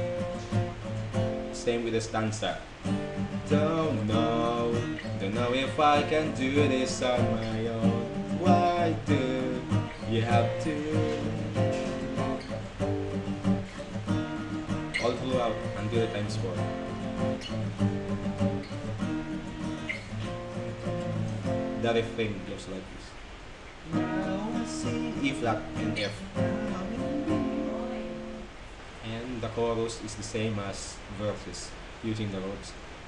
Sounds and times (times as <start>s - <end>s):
Strum: 2.8s - 22.4s, 23.8s - 28.6s.